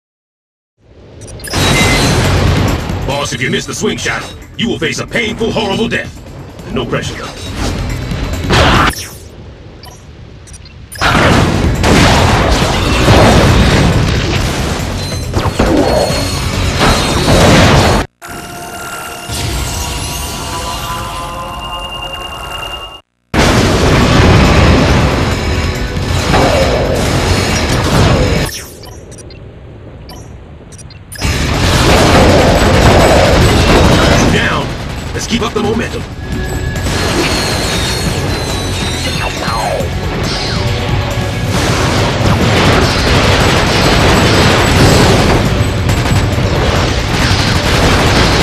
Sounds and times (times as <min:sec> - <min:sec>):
Speech: 0:03.1 - 0:07.4, 0:34.0 - 0:36.0, 0:39.0 - 0:39.9
Music: 0:38.0 - 0:42.3.